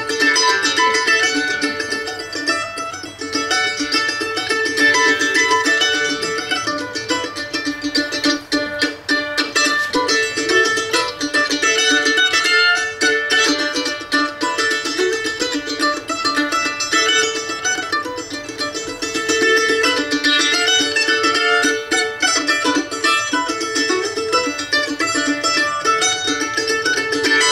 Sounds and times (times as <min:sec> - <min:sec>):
Guitar: 0:00.0 - 0:27.5
Mandolin: 0:00.0 - 0:27.5
Ukulele: 0:00.0 - 0:27.5.